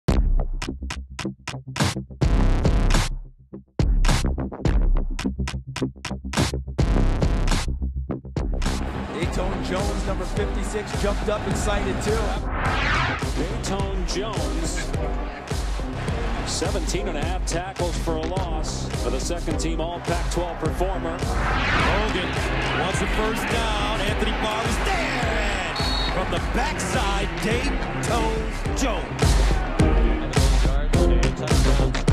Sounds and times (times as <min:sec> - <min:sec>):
Drum machine: 0:03.8 - 0:07.8, 0:08.4 - 0:12.4, 0:13.2 - 0:32.1
Speech: 0:09.1 - 0:12.4, 0:13.4 - 0:15.5, 0:16.5 - 0:21.2, 0:21.8 - 0:29.2.